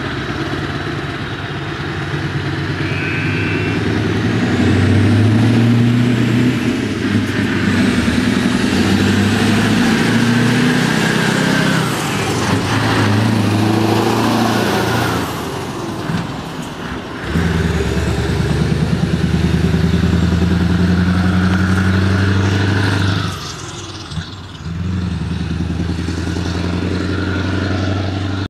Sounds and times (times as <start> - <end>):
Car: 0.0 - 28.5.